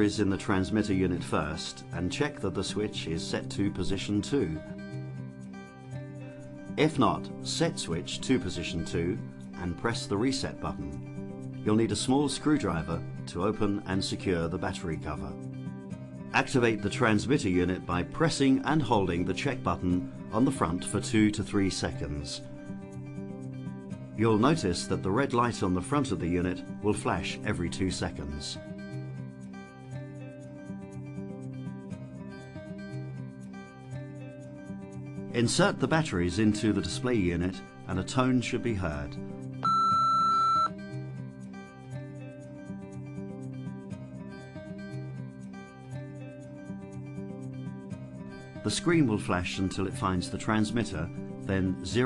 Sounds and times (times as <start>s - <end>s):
Speech: 0.0s - 4.6s, 6.8s - 11.0s, 11.7s - 15.4s, 16.4s - 22.5s, 24.2s - 28.6s, 35.4s - 39.2s, 48.7s - 52.0s
Music: 0.0s - 52.0s.